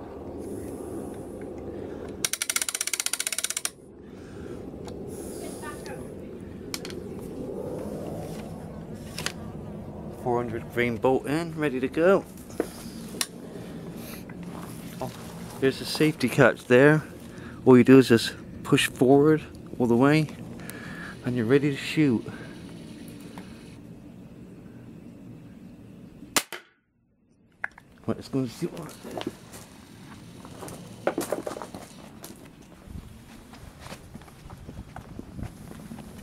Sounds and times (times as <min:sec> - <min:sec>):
Speech: 0:10.2 - 0:12.2, 0:15.0 - 0:20.3, 0:21.2 - 0:22.4, 0:28.0 - 0:29.3.